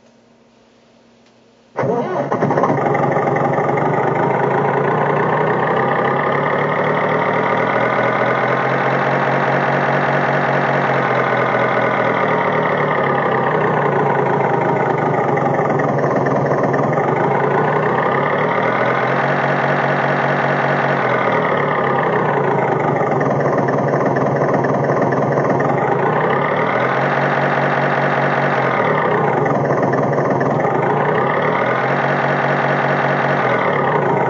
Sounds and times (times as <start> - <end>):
Vehicle: 1.8 - 34.3
Accelerating, revving, vroom: 2.4 - 15.4, 17.0 - 23.2, 25.5 - 34.3.